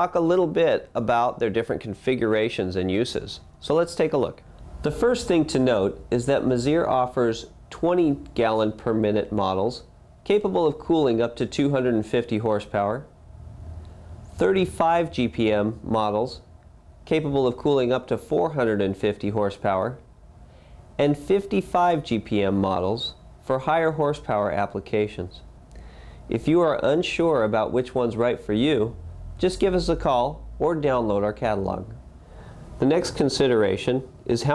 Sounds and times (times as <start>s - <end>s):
Speech: 0.0s - 13.1s, 14.4s - 20.1s, 21.0s - 25.5s, 26.3s - 32.0s, 32.8s - 34.5s.